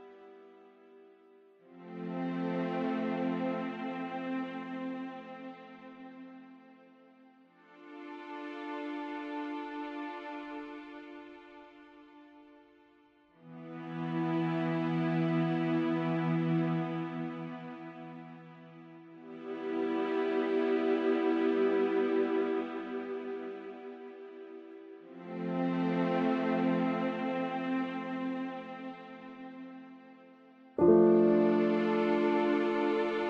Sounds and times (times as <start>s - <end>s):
Music: 0.0s - 33.2s.